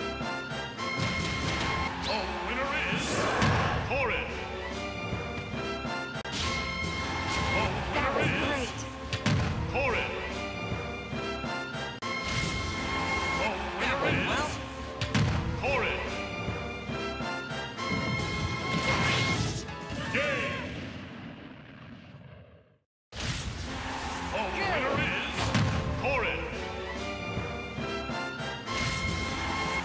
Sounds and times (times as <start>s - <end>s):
Music: 0.0s - 20.6s, 23.2s - 29.8s
Speech: 15.6s - 16.2s, 24.4s - 25.4s, 26.0s - 26.6s.